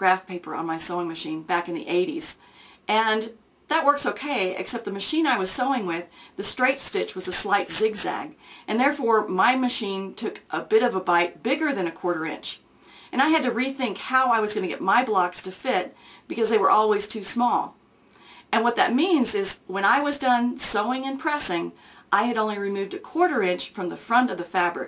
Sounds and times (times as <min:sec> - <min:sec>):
Speech: 0:00.0 - 0:17.8, 0:18.5 - 0:24.8.